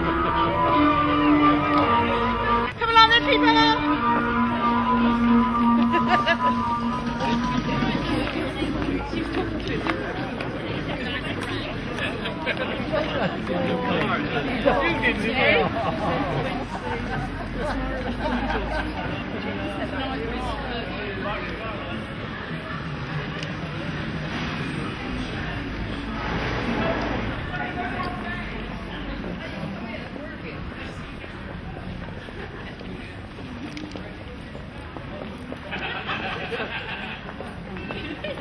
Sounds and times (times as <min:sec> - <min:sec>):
Music: 0:00.0 - 0:08.9.